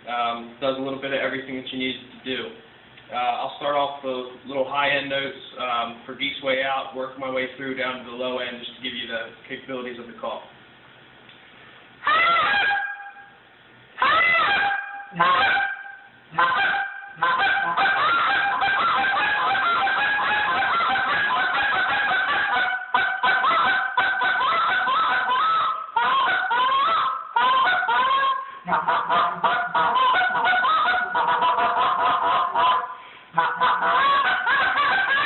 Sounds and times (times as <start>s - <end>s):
Speech: 0.0s - 10.6s.